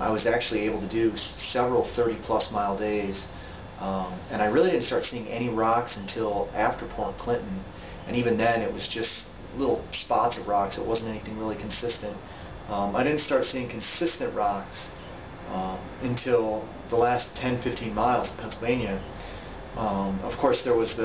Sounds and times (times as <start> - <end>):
Speech: 0.0 - 19.1, 19.8 - 21.0.